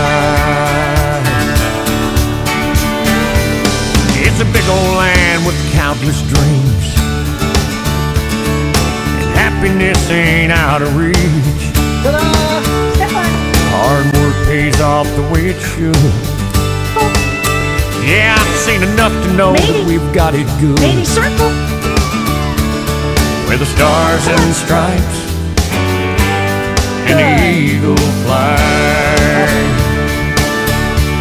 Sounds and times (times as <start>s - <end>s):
Music: 0.0s - 31.2s.